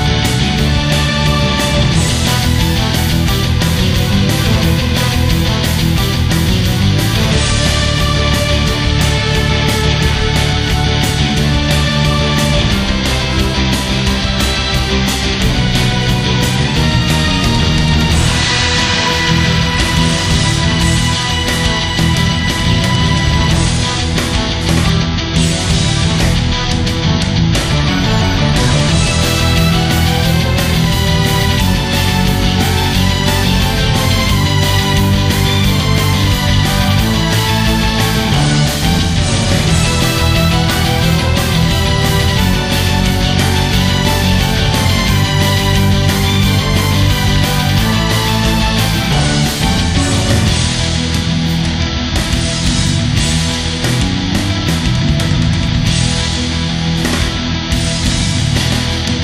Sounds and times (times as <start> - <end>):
Music: 0.0 - 59.2.